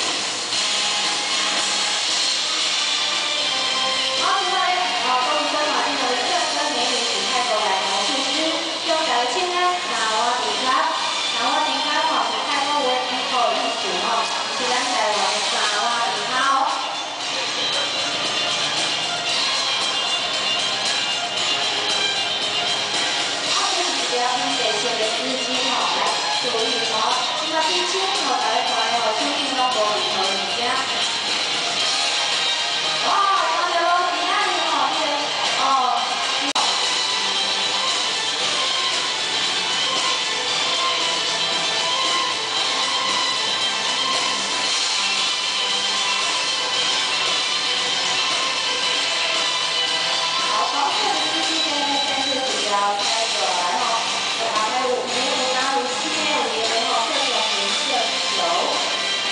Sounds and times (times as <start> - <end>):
Music: 0.0 - 59.3
Speech: 4.2 - 17.6, 23.5 - 31.0, 33.0 - 36.8, 50.5 - 58.9.